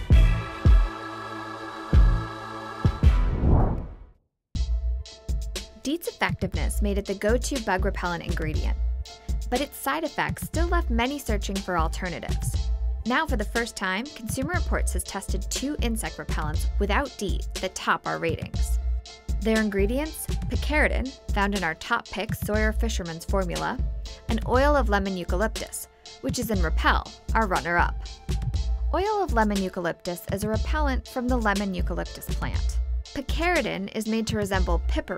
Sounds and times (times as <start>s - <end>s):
Music: 0.0s - 3.8s, 4.6s - 35.1s
Speech: 5.8s - 8.8s, 9.5s - 18.8s, 19.4s - 28.0s, 29.0s - 35.1s.